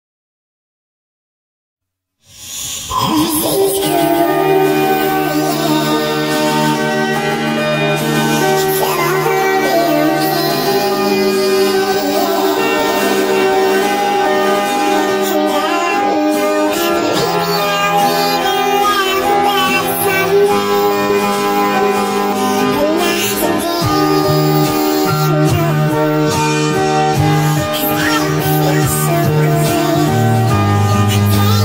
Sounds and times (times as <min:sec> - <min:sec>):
Music: 0:02.2 - 0:31.6.